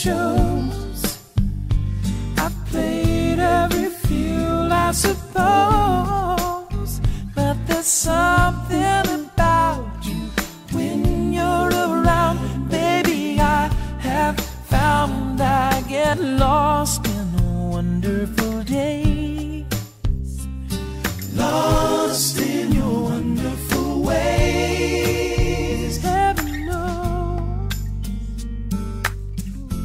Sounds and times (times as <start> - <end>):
Singing: 0.0 - 1.1, 2.4 - 6.8, 7.4 - 16.5, 21.3 - 27.3
Music: 0.0 - 29.8.